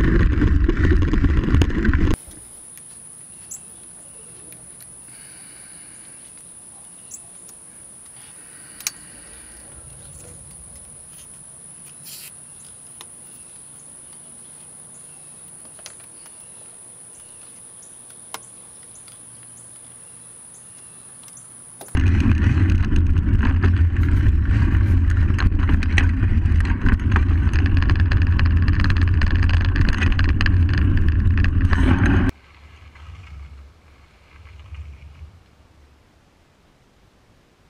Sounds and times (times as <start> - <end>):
Bicycle: 0.0 - 2.2, 21.9 - 35.6
Outside, rural or natural: 0.0 - 37.7
Insect: 2.2 - 22.0.